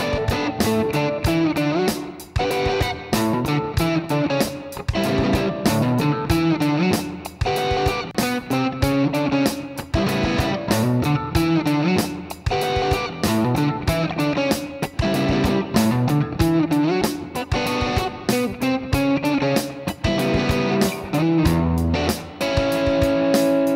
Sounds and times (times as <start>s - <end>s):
Guitar: 0.0s - 23.7s.